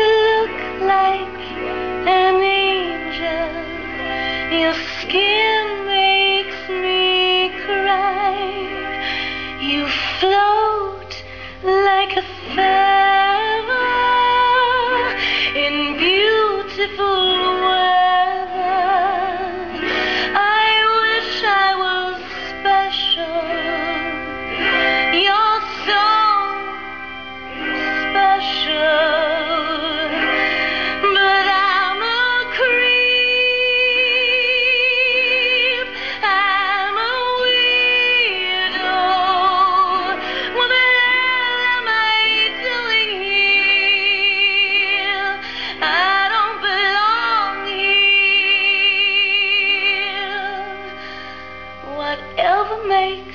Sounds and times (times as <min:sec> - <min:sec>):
Female singing: 0:00.0 - 0:03.7, 0:04.5 - 0:08.7, 0:09.6 - 0:19.7, 0:20.3 - 0:24.2, 0:31.0 - 0:50.8, 0:51.9 - 0:53.3
Music: 0:00.0 - 0:53.3.